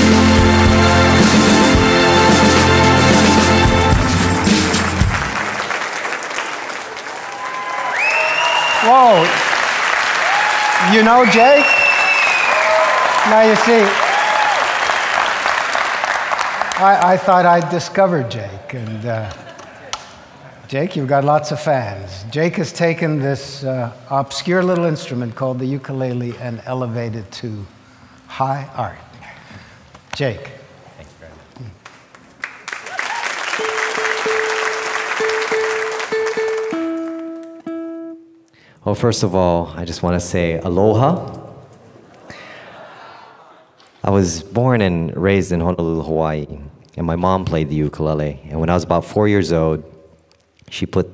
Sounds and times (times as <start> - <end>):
Music: 0.0 - 5.7, 33.6 - 38.5
Applause: 4.2 - 17.7, 31.8 - 37.7
Speech: 10.8 - 11.7, 13.2 - 14.0, 16.8 - 19.4, 20.7 - 27.7, 28.3 - 29.1, 30.2 - 31.8, 38.8 - 41.5, 44.0 - 49.9, 50.7 - 51.1.